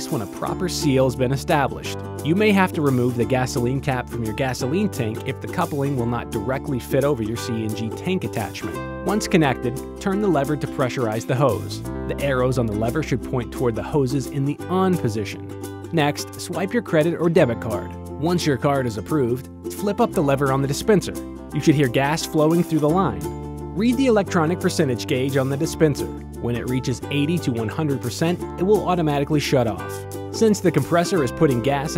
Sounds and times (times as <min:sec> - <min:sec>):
Music: 0:00.0 - 0:31.9
Speech: 0:00.0 - 0:31.9.